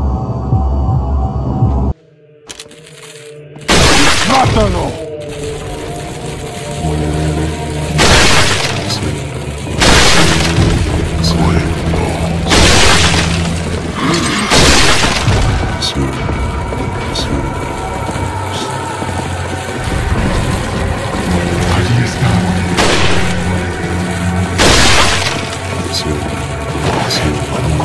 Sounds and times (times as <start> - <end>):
Music: 0.0 - 27.8
Speech: 4.3 - 5.0, 15.8 - 16.3, 21.3 - 22.6, 25.8 - 27.8.